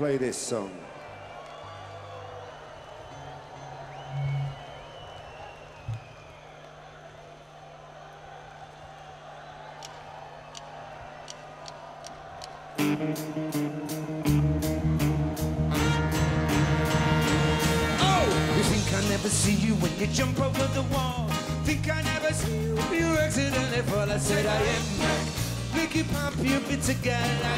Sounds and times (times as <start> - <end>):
Music: 1.0 - 6.5, 12.7 - 27.5.